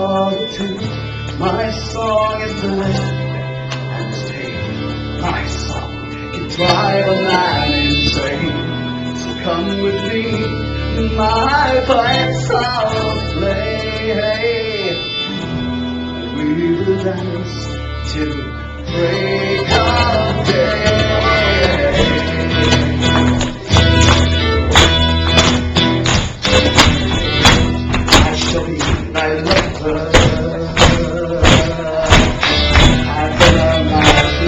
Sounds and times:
Music: 0:00.0 - 0:34.4.

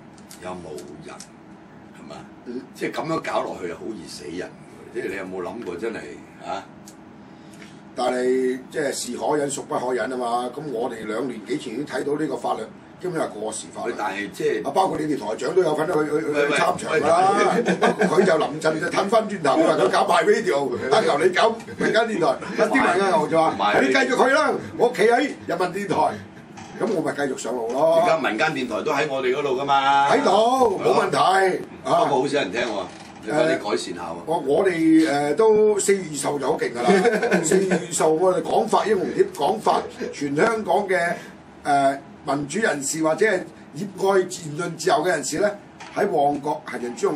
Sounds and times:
Speech: 0:00.3 - 0:01.3, 0:01.9 - 0:06.8, 0:08.0 - 0:47.1.

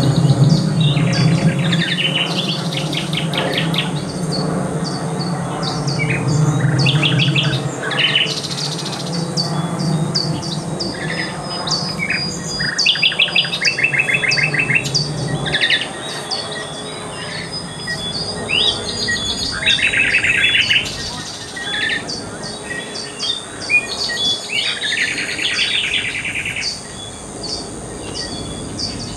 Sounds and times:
Speech: 0:00.1 - 0:04.2, 0:05.0 - 0:09.7, 0:15.5 - 0:26.1.

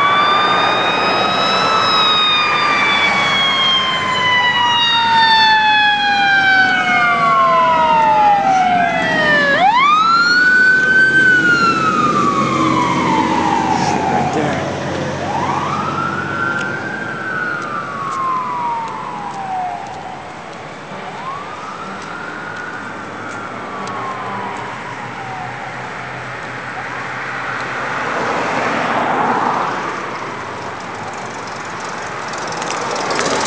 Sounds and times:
Engine: 0:00.0 - 0:33.4
Fire engine, fire truck (siren): 0:00.0 - 0:33.4.

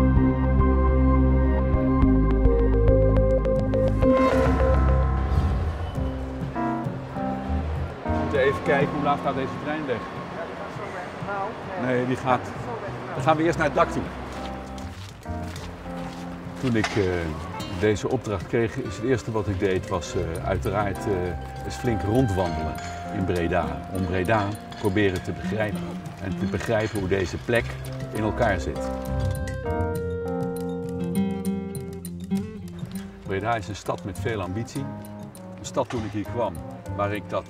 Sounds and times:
Music: 0:00.0 - 0:37.4
Speech: 0:08.3 - 0:14.1, 0:16.6 - 0:28.9, 0:33.3 - 0:34.9, 0:35.6 - 0:37.4.

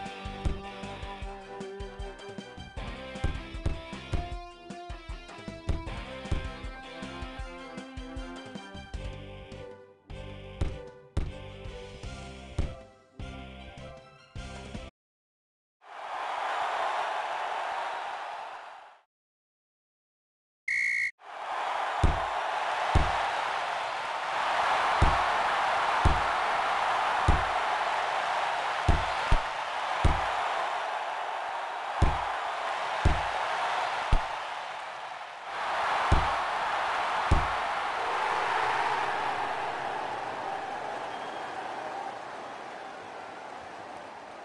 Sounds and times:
Chop: 0:22.9 - 0:23.2, 0:25.0 - 0:25.3, 0:26.0 - 0:26.4, 0:27.3 - 0:27.6, 0:28.9 - 0:30.4, 0:32.0 - 0:32.3, 0:33.0 - 0:33.3, 0:36.1 - 0:36.4, 0:37.2 - 0:37.6.

